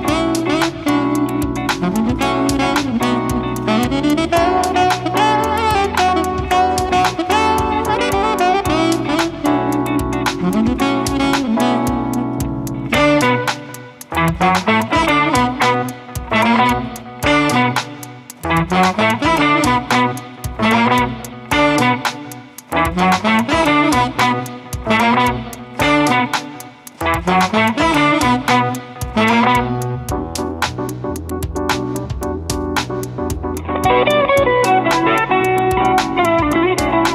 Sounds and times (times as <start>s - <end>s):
Electric guitar: 0.0s - 37.1s.